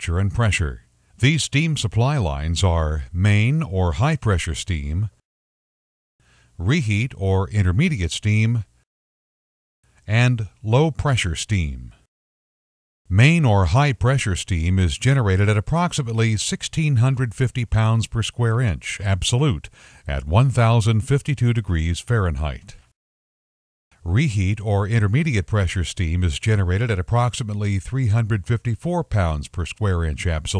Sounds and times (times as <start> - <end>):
Speech: 0.0 - 5.2, 6.6 - 8.7, 10.1 - 12.0, 13.1 - 22.8, 24.0 - 30.5.